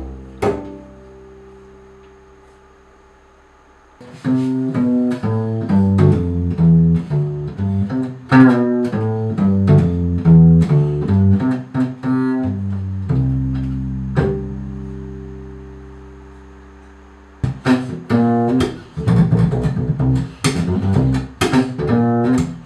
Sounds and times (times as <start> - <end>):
Pizzicato: 0.0 - 2.2, 4.0 - 22.6
Cello: 0.0 - 2.8, 4.0 - 22.6
Double bass: 0.0 - 22.6.